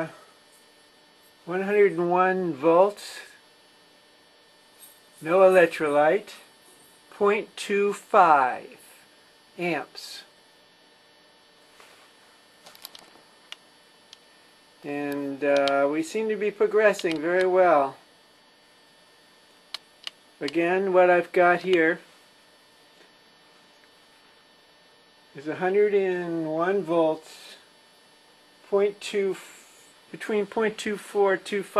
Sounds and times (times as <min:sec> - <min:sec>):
Speech: 0:01.5 - 0:03.4, 0:05.2 - 0:06.5, 0:07.1 - 0:08.8, 0:09.6 - 0:10.3, 0:14.8 - 0:18.0, 0:20.4 - 0:22.1, 0:25.3 - 0:27.7, 0:28.7 - 0:31.7.